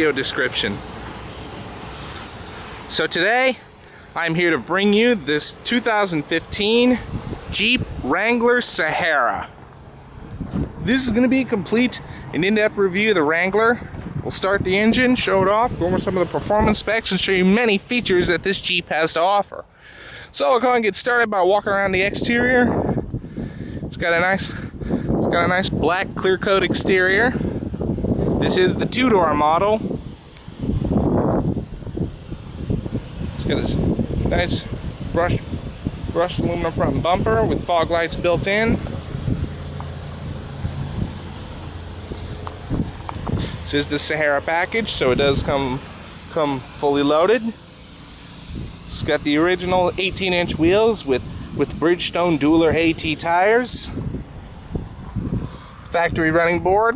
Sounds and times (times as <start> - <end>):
Speech: 0.0 - 0.9, 2.9 - 9.6, 10.8 - 19.7, 20.3 - 22.8, 23.9 - 27.5, 28.4 - 29.9, 33.4 - 35.5, 36.1 - 38.9, 43.7 - 47.6, 48.9 - 54.0, 55.9 - 56.9.